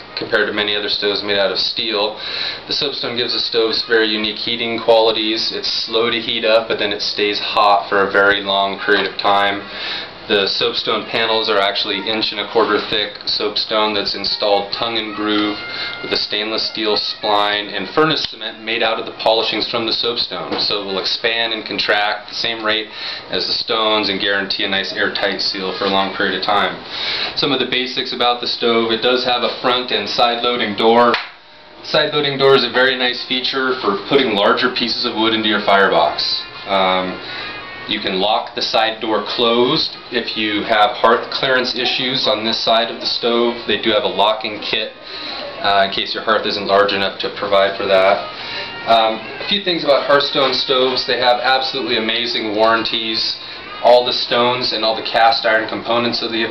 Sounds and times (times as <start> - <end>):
Speech: 0.0 - 31.2, 31.8 - 56.5.